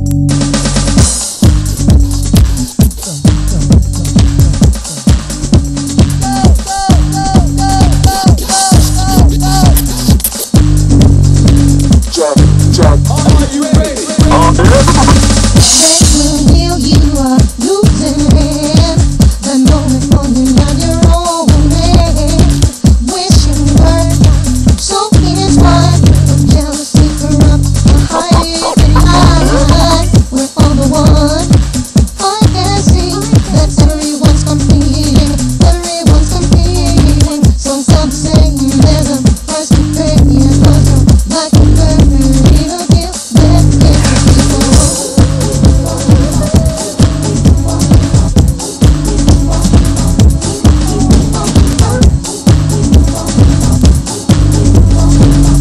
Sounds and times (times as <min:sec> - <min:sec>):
House music: 0:00.0 - 0:20.4, 0:21.0 - 0:55.6
Soundtrack music: 0:12.1 - 0:15.5, 0:27.9 - 0:30.2.